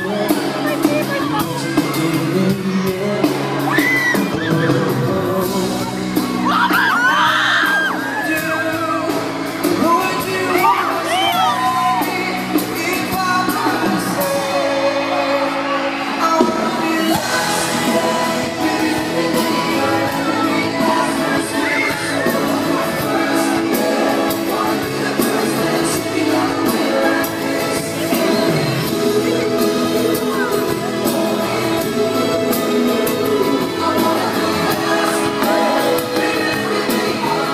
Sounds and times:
Inside, large room or hall: 0.0s - 37.5s
Music: 0.0s - 37.5s
Singing: 0.0s - 37.5s.

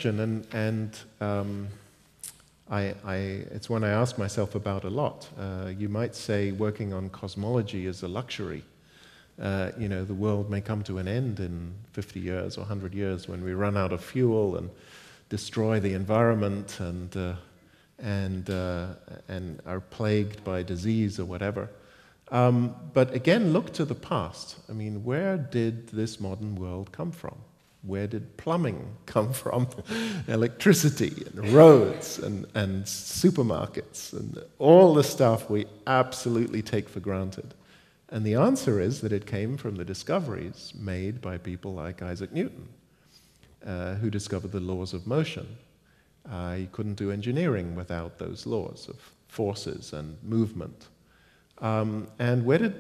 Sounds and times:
Speech: 0.0s - 8.7s, 9.4s - 42.8s, 43.6s - 45.6s, 46.3s - 50.9s, 51.6s - 52.8s.

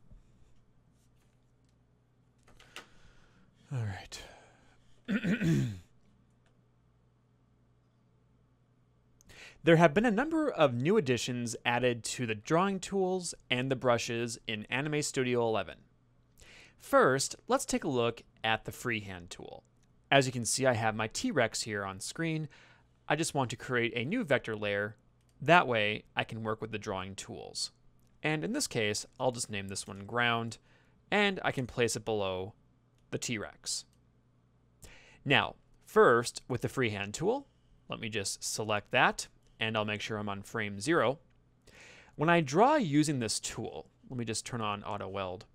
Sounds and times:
Speech: 3.7s - 4.4s, 9.6s - 15.9s, 16.8s - 22.5s, 23.1s - 33.9s, 35.2s - 41.2s, 42.2s - 45.5s.

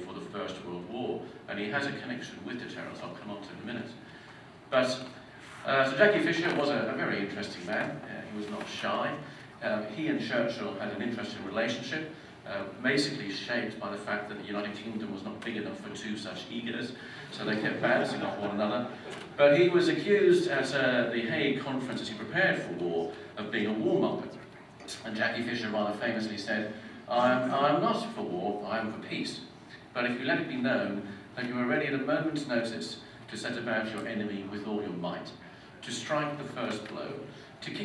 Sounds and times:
Male speech, man speaking: 0.0s - 4.0s, 4.7s - 37.8s.

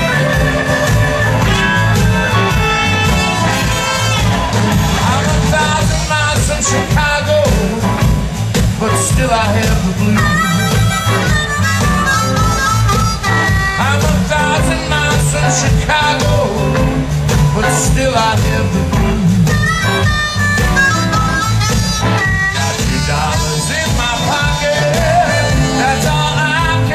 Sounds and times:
Blues: 0.0s - 26.9s
Song: 0.0s - 26.9s.

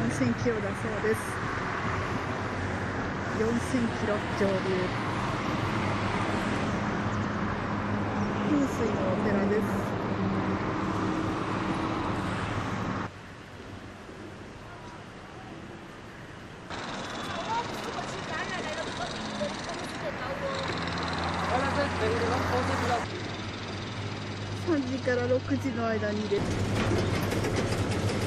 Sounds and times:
Vehicle: 0.0s - 28.2s.

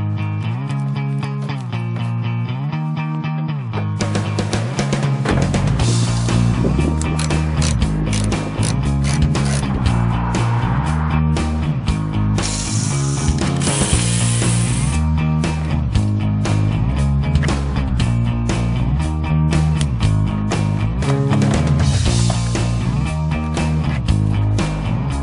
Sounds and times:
Music: 0.0s - 25.2s.

